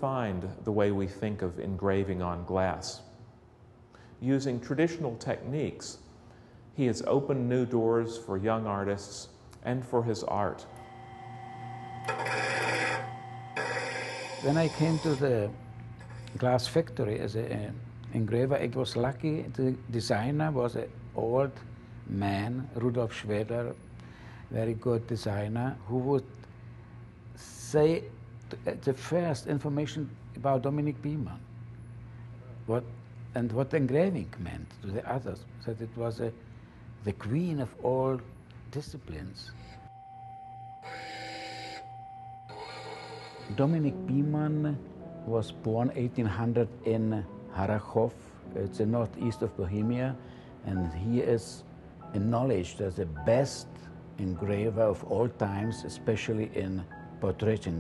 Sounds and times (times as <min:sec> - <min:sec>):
Speech: 0:00.0 - 0:03.2, 0:04.2 - 0:06.0, 0:06.8 - 0:10.7, 0:14.4 - 0:15.6, 0:16.4 - 0:23.8, 0:24.5 - 0:26.3, 0:27.4 - 0:31.4, 0:32.7 - 0:36.4, 0:37.0 - 0:39.5, 0:43.5 - 0:57.8.